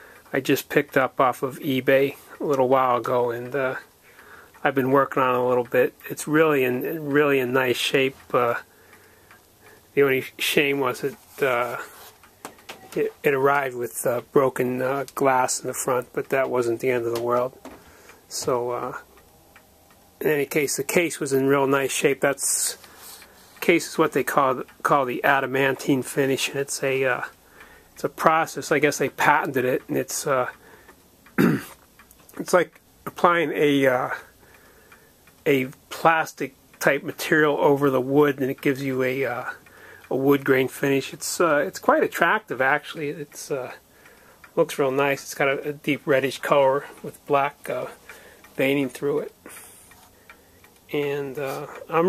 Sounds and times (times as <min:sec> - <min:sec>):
Speech: 0:00.3 - 0:03.9, 0:04.6 - 0:08.7, 0:10.0 - 0:12.0, 0:12.9 - 0:17.6, 0:18.3 - 0:19.0, 0:20.2 - 0:22.9, 0:23.6 - 0:27.4, 0:28.0 - 0:30.6, 0:32.3 - 0:34.3, 0:35.4 - 0:43.8, 0:44.6 - 0:48.0, 0:48.6 - 0:49.6, 0:50.9 - 0:52.0.